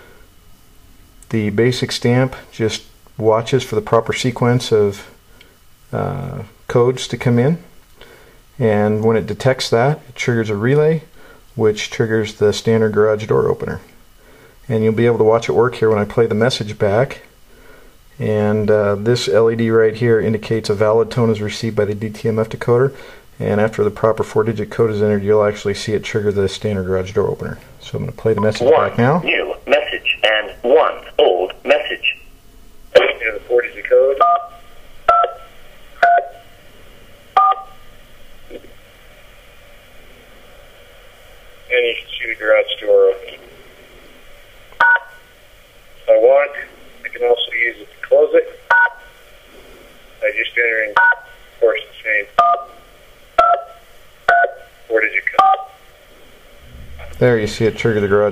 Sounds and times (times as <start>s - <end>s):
Speech: 1.3s - 5.2s, 5.9s - 7.7s, 8.6s - 13.9s, 14.7s - 17.3s, 18.2s - 32.3s, 32.9s - 34.4s, 41.7s - 43.4s, 46.0s - 48.7s, 50.2s - 52.4s, 54.9s - 55.6s, 57.1s - 58.3s.